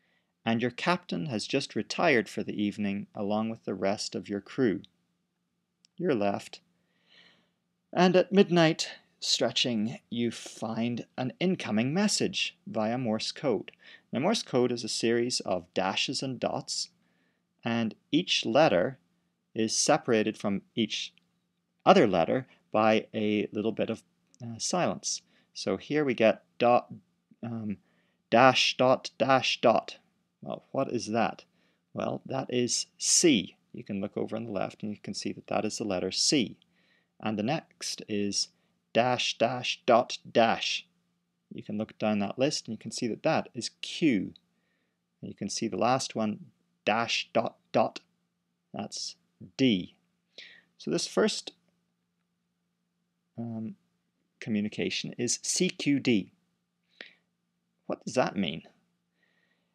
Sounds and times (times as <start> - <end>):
Speech: 0.5 - 4.9, 6.0 - 6.6, 8.0 - 17.0, 17.6 - 19.0, 19.6 - 21.2, 21.9 - 27.8, 28.4 - 36.6, 37.2 - 40.9, 41.5 - 44.4, 45.2 - 48.1, 48.8 - 50.0, 50.8 - 51.6, 53.4 - 53.8, 54.4 - 56.4, 57.9 - 58.8.